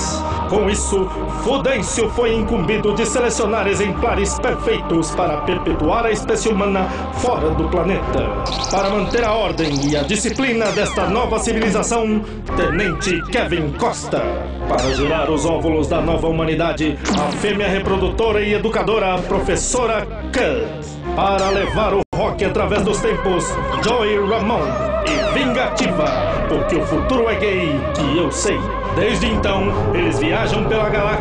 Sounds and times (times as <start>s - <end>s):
Music: 0.0s - 31.2s
Speech: 0.0s - 31.2s.